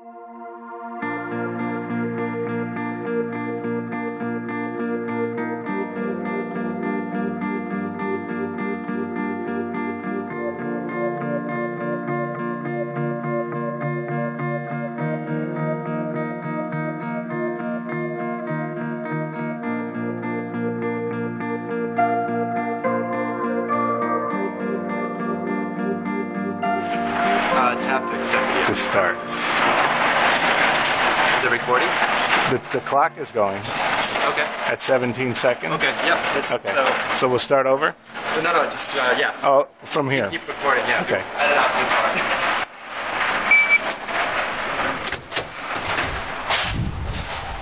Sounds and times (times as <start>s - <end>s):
Music: 0.0s - 35.6s
Speech: 27.5s - 29.2s, 31.4s - 42.3s.